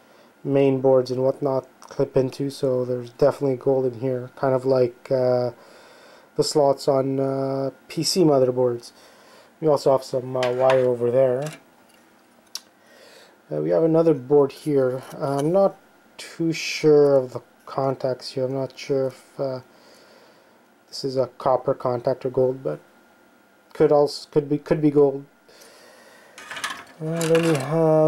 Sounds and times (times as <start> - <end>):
Inside, small room: 0.0 - 28.0
Speech: 0.4 - 5.6, 6.4 - 9.0, 9.6 - 11.6, 13.5 - 19.7, 20.9 - 22.8, 23.7 - 25.3, 27.0 - 28.0.